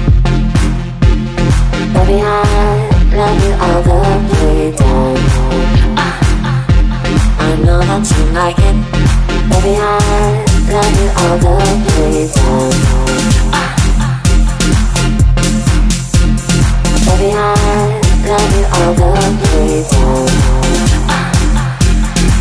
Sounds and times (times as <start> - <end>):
Dance music: 0.0 - 22.4.